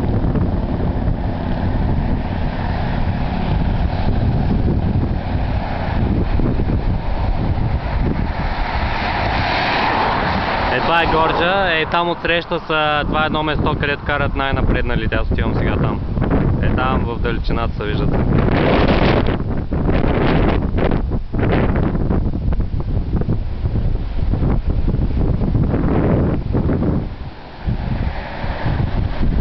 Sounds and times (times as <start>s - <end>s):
Speech: 10.7s - 16.0s, 16.6s - 18.2s.